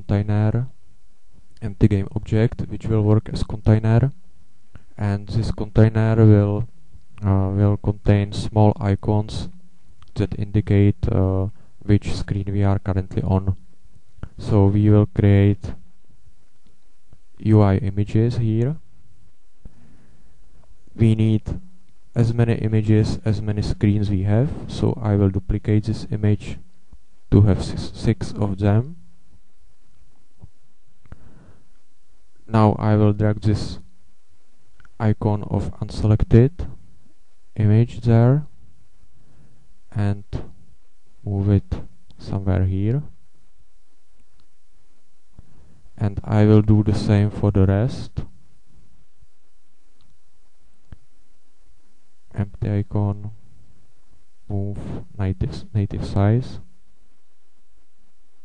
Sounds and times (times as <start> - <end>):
Speech: 0.0 - 0.8, 1.6 - 4.2, 5.0 - 13.6, 14.2 - 15.8, 17.4 - 18.9, 21.0 - 26.7, 27.3 - 29.0, 32.5 - 33.9, 34.9 - 36.8, 37.6 - 38.6, 39.9 - 40.6, 41.2 - 43.2, 46.0 - 48.3, 52.3 - 53.4, 54.5 - 56.7
Inside, small room: 0.0 - 58.4.